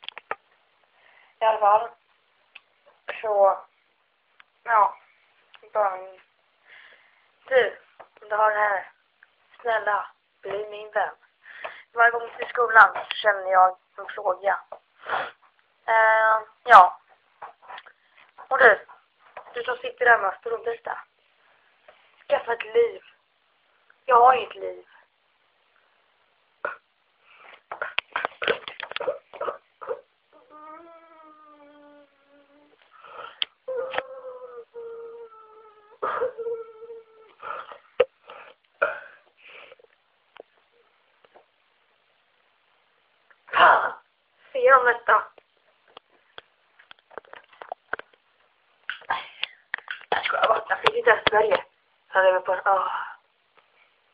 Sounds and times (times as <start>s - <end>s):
Inside, small room: 0.0s - 54.1s.